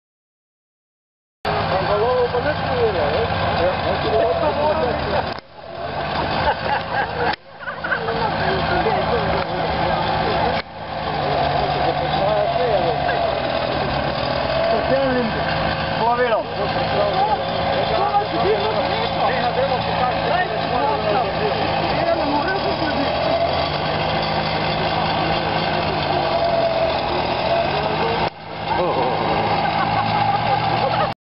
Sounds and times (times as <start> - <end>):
Speech: 1.5 - 5.4, 8.0 - 23.5.